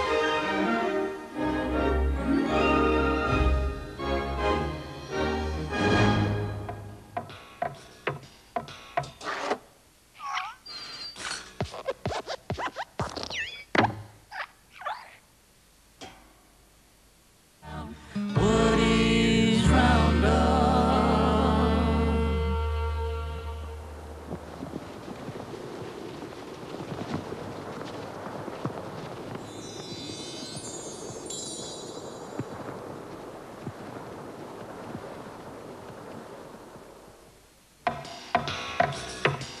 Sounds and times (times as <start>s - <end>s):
Music: 0.0s - 9.1s, 17.6s - 24.1s, 37.9s - 39.6s.